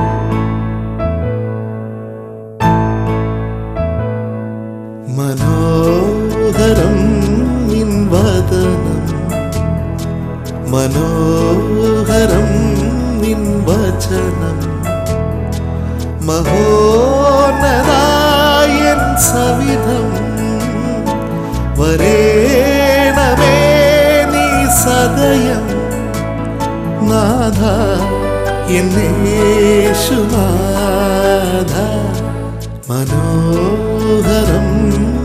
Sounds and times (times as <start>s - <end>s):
Music: 0.0s - 35.2s.